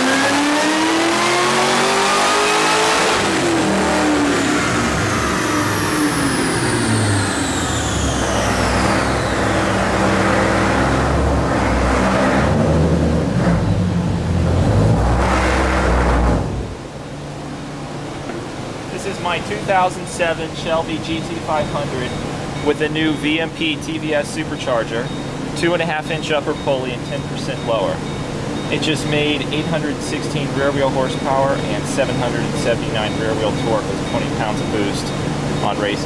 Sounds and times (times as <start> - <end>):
Speech: 18.9 - 28.0, 28.7 - 36.0.